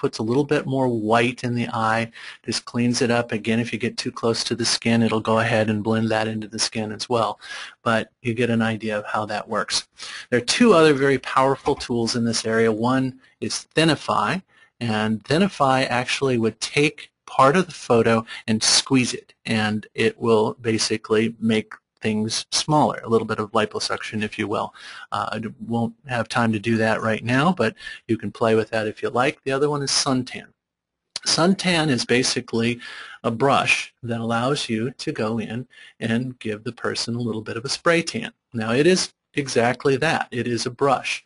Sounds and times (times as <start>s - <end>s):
Speech: 0.0s - 30.5s, 31.2s - 41.2s.